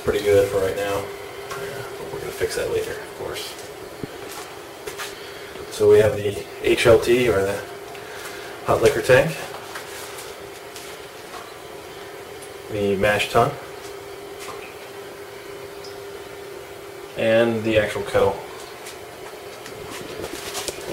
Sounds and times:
Speech: 0.0 - 3.6, 5.7 - 7.7, 8.6 - 9.6, 12.7 - 13.7, 17.2 - 18.6.

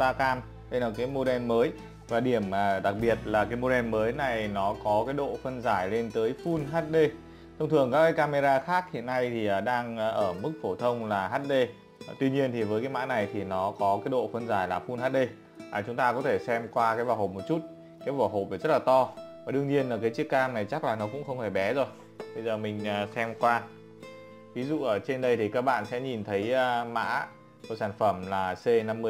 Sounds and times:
Speech: 0.0 - 23.7, 24.6 - 29.1
Music: 0.0 - 29.1.

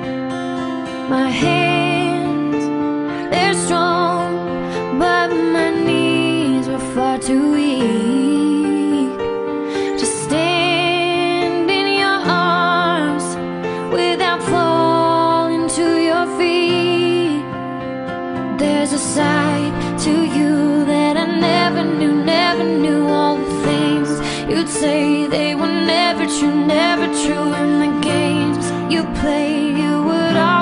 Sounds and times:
Music: 0.0 - 30.6.

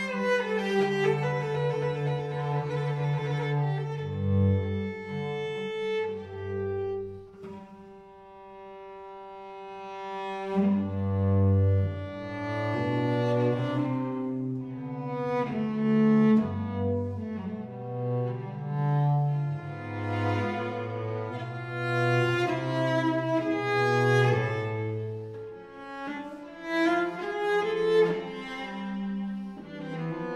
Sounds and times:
Double bass: 0.0 - 8.0, 9.7 - 30.3
Cello: 0.0 - 30.3.

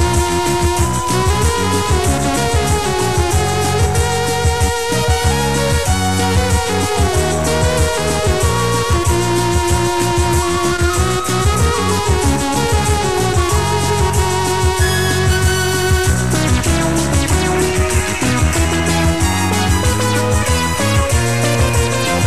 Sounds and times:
Music: 0.0 - 22.2.

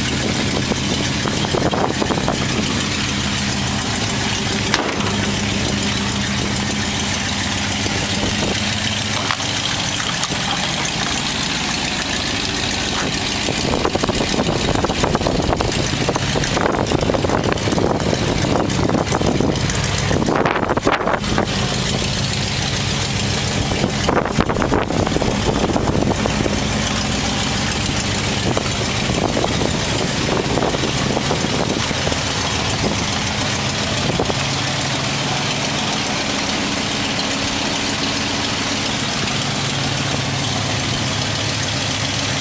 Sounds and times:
Truck: 0.0 - 42.4.

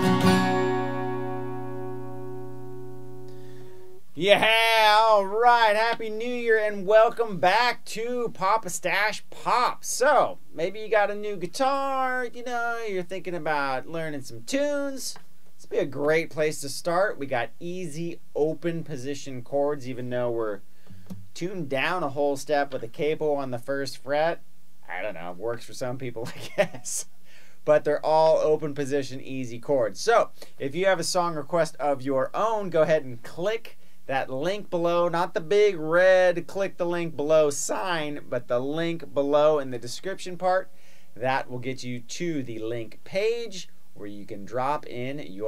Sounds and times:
Speech: 4.2 - 20.6, 21.4 - 45.4.

